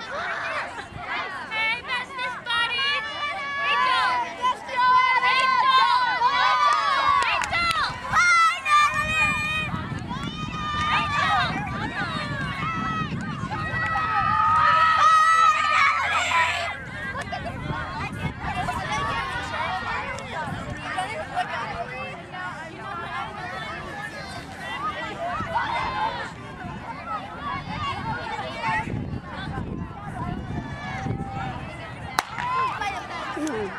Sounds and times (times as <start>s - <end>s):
Outside, urban or manmade: 0.0s - 33.7s.